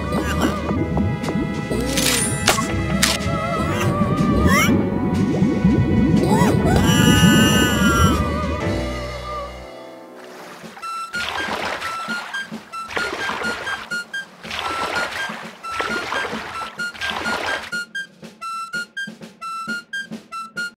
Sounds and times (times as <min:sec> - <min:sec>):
Boat, Water vehicle: 0:00.0 - 0:18.1
Music: 0:00.0 - 0:20.7.